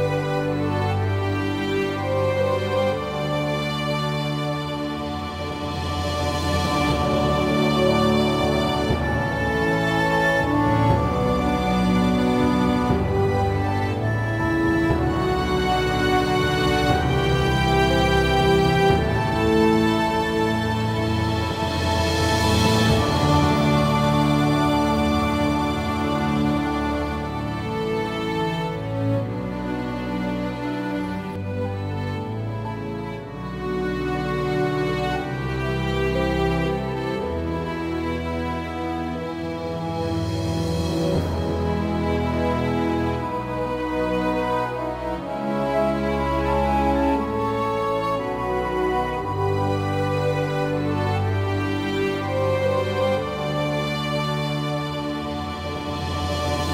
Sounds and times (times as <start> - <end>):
Music: 0.0 - 56.7.